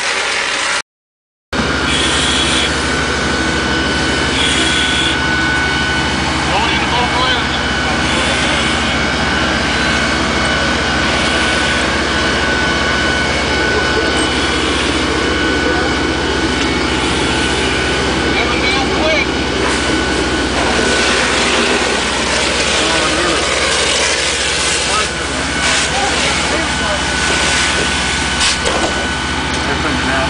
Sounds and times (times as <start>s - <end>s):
Speech: 6.5s - 8.6s, 18.3s - 19.3s, 24.8s - 27.6s, 29.6s - 30.3s.